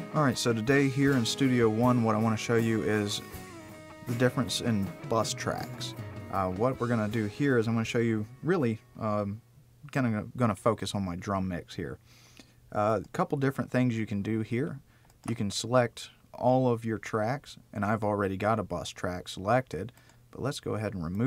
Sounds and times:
Speech: 0:00.1 - 0:03.2, 0:04.1 - 0:12.0, 0:12.7 - 0:21.2.

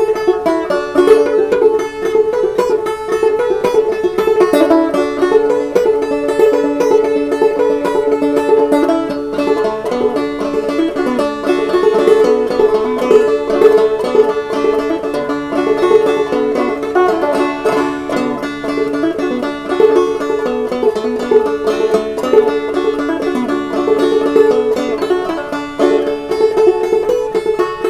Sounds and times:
Banjo: 0:00.0 - 0:27.8.

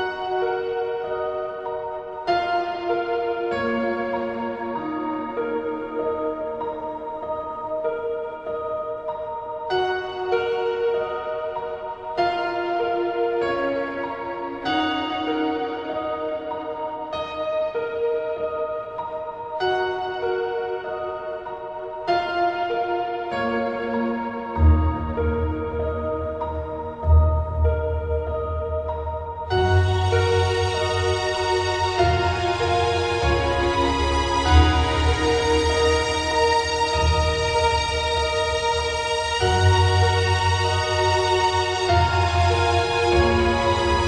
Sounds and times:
New-age music: 0:00.0 - 0:44.0.

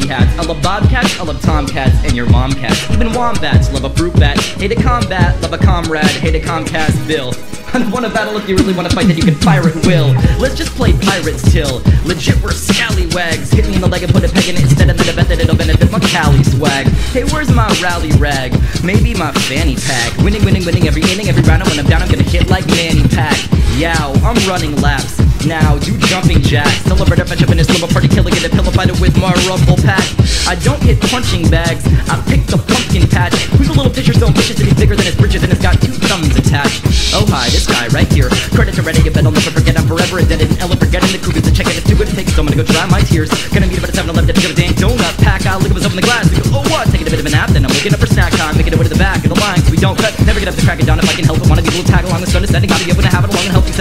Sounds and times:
Music: 0:00.0 - 0:53.8.

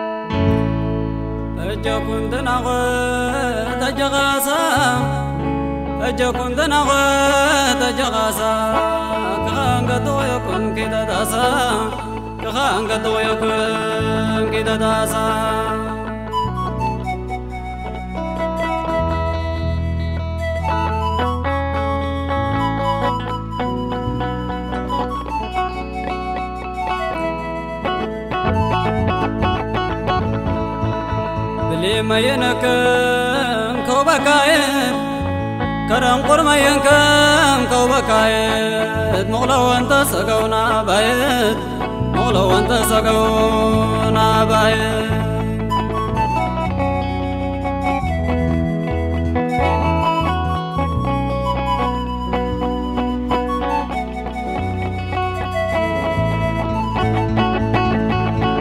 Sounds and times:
Music: 0:00.0 - 0:58.6.

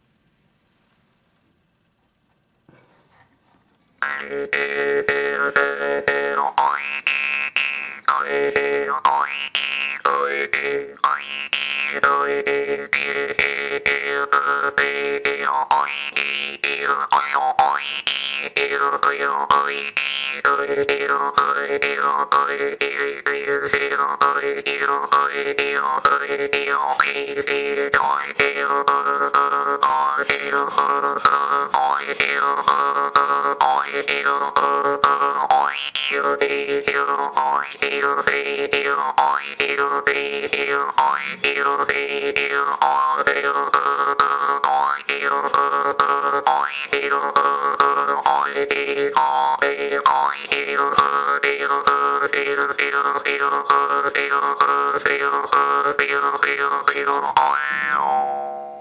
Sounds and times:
Boing: 0:06.3 - 0:11.8, 0:33.6 - 0:36.2, 0:41.0 - 0:41.7, 0:46.0 - 0:47.2, 0:56.0 - 0:58.8.

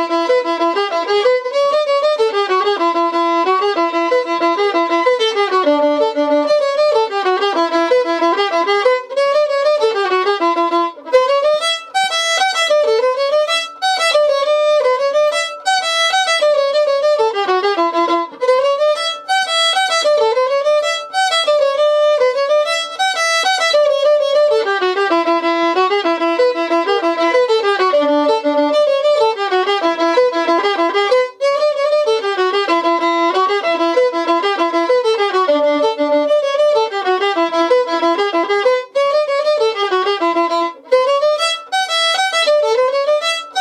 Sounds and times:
Violin, fiddle: 0:00.0 - 0:43.6.

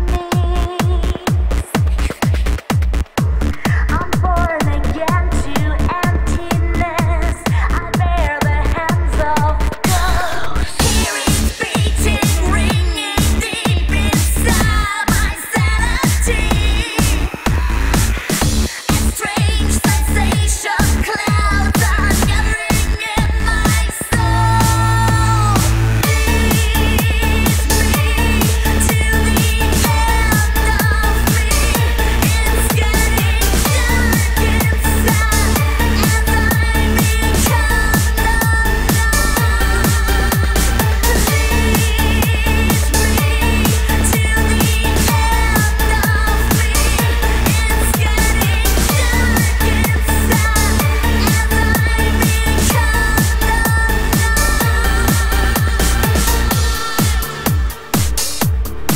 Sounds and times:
Music: 0:00.0 - 0:58.9.

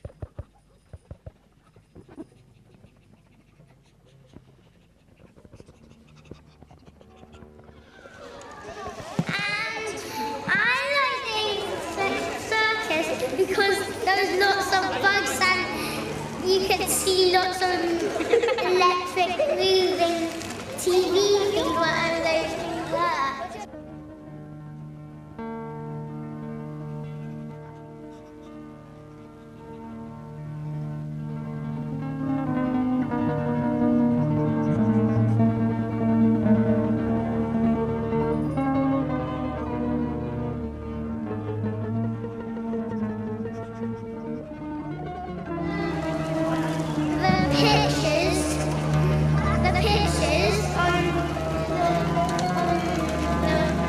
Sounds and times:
Music: 0:05.7 - 0:53.8
Speech: 0:09.3 - 0:15.8, 0:16.4 - 0:23.7, 0:47.2 - 0:48.7, 0:49.4 - 0:51.2.

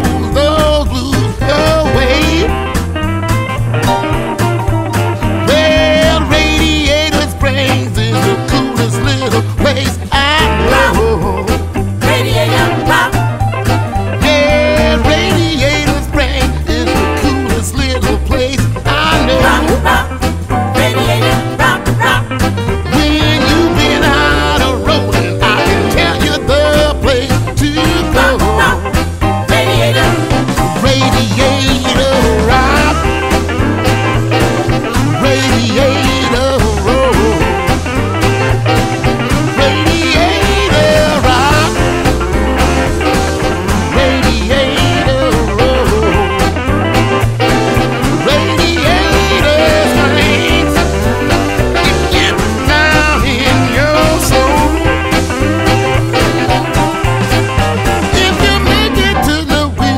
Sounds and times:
Music: 0:00.0 - 0:59.9.

